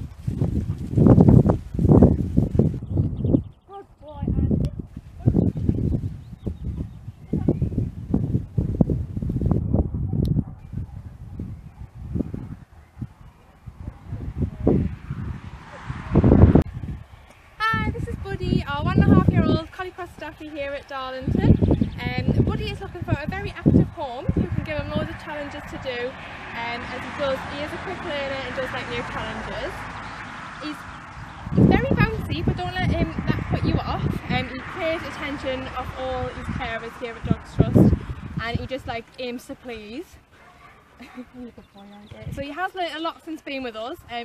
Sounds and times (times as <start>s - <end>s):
Speech: 17.6s - 29.8s, 31.6s - 40.2s, 41.7s - 44.2s.